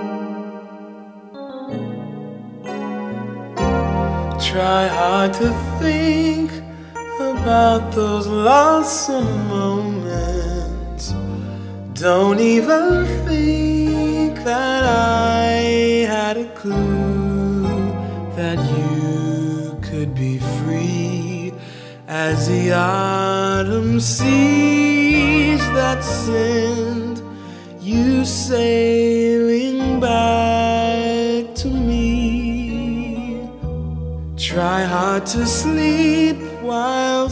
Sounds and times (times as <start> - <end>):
Sad music: 0.0 - 37.3.